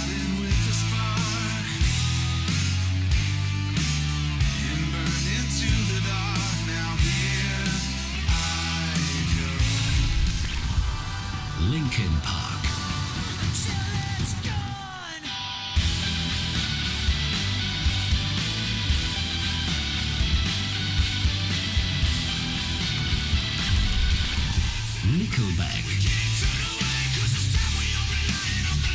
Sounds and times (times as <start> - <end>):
Music: 0.0 - 28.9
Speech: 11.6 - 12.8, 25.0 - 26.3.